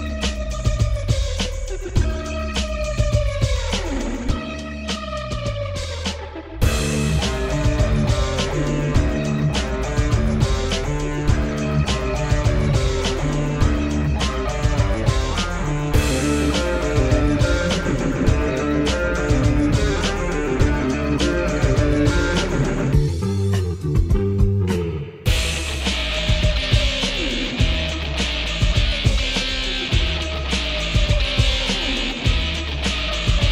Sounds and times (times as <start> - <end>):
Bass guitar: 0.0 - 33.5
Strum: 0.0 - 33.5.